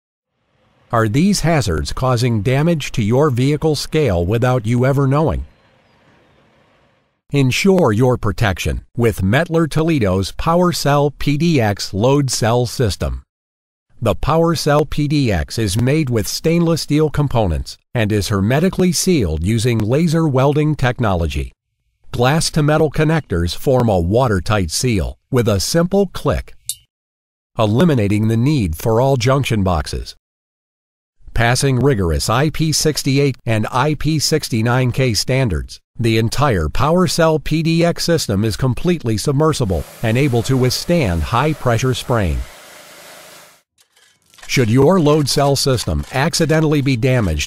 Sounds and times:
Speech: 0:00.9 - 0:05.5, 0:07.3 - 0:13.3, 0:14.0 - 0:26.6, 0:27.6 - 0:30.2, 0:31.3 - 0:42.5, 0:44.4 - 0:47.4.

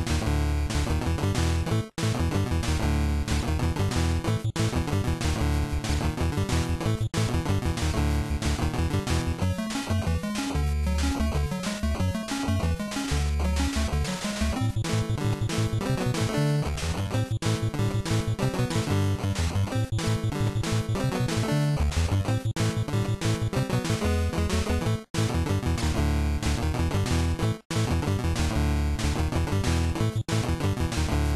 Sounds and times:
Video game music: 0:00.0 - 0:31.3.

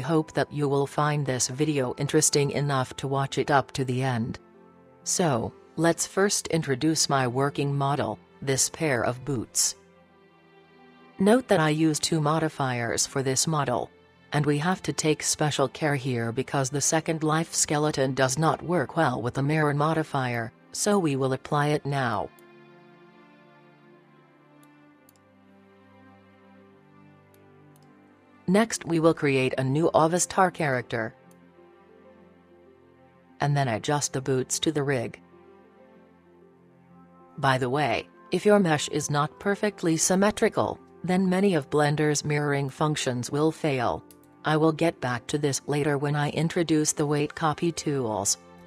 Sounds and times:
Speech: 0:00.0 - 0:04.4, 0:05.1 - 0:09.8, 0:11.2 - 0:22.3, 0:28.5 - 0:31.1, 0:33.4 - 0:35.2, 0:37.4 - 0:48.4
Music: 0:00.0 - 0:48.6.

